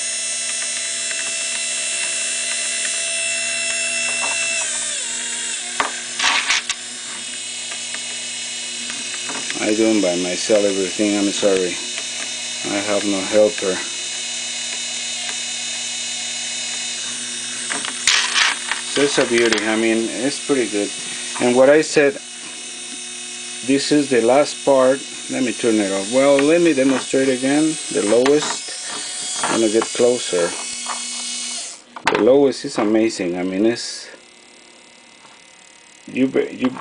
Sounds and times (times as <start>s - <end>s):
Gears: 0.0s - 31.8s.